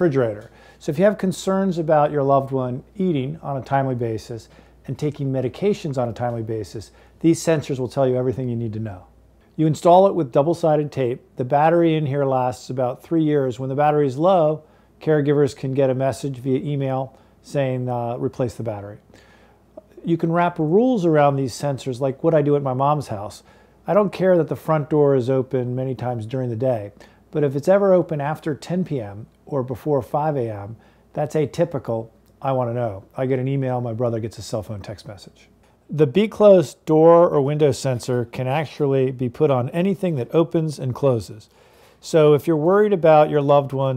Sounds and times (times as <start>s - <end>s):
Speech: 0.0s - 19.1s, 19.8s - 43.9s.